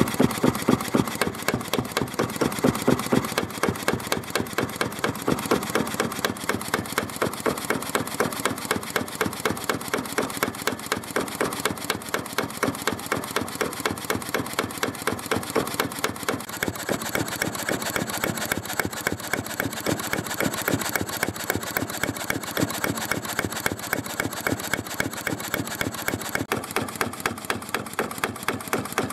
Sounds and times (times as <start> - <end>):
Engine: 0.0 - 29.1.